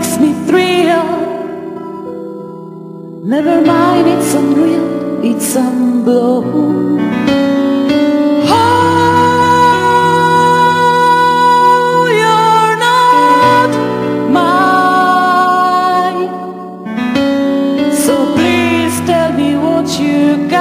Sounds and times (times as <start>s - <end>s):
Piano: 0.0s - 20.6s.